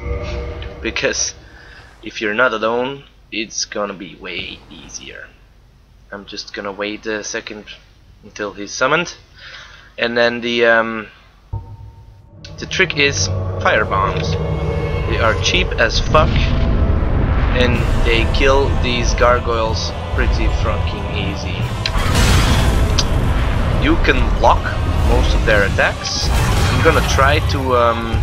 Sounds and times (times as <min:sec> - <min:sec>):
Music: 0:00.0 - 0:01.9, 0:11.5 - 0:28.2
Speech: 0:00.8 - 0:01.4, 0:02.0 - 0:05.4, 0:06.1 - 0:09.2, 0:10.0 - 0:11.2, 0:12.5 - 0:14.4, 0:15.1 - 0:16.6, 0:17.6 - 0:21.7, 0:23.8 - 0:28.2.